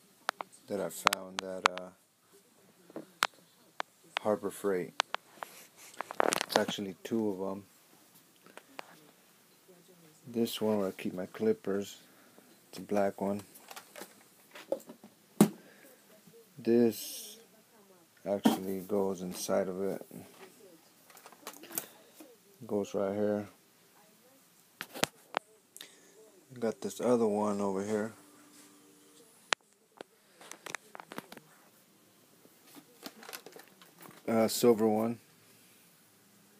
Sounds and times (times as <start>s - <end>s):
Speech: 0.0s - 5.0s, 8.7s - 12.0s, 12.7s - 13.5s, 15.7s - 20.8s, 25.2s - 28.3s, 34.2s - 35.2s.